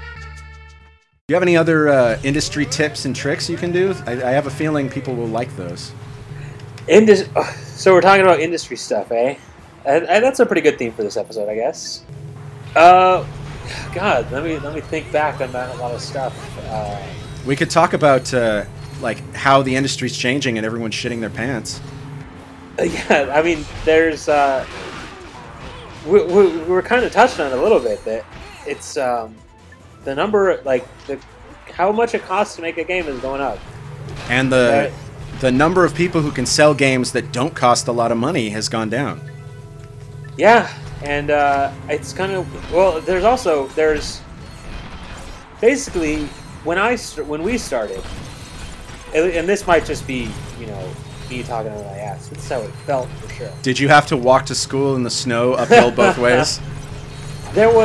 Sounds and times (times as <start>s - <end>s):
Speech: 1.3s - 5.9s, 12.8s - 21.8s, 26.1s - 29.4s, 31.7s - 33.6s, 34.3s - 39.2s, 40.4s - 44.2s, 45.6s - 48.0s, 49.2s - 56.6s, 57.6s - 57.8s.